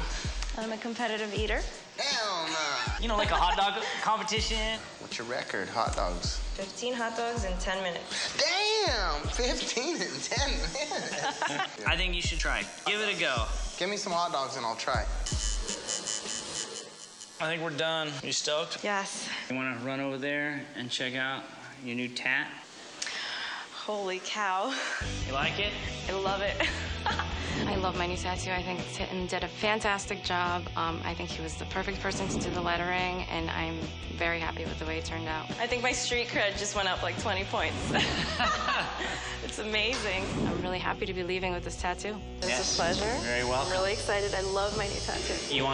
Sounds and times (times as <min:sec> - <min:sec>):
Music: 0:00.0 - 0:18.3, 0:24.9 - 0:45.7.